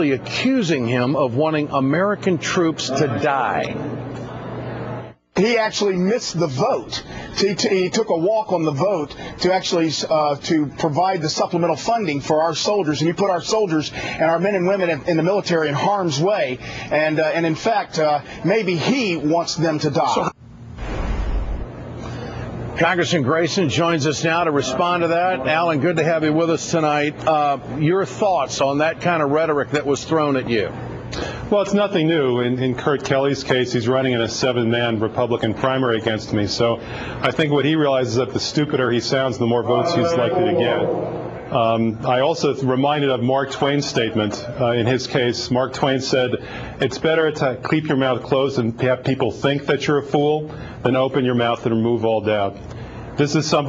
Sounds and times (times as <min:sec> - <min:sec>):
Speech: 0:00.0 - 0:03.8, 0:05.4 - 0:20.4, 0:22.8 - 0:30.8, 0:31.5 - 0:52.6, 0:53.2 - 0:53.6.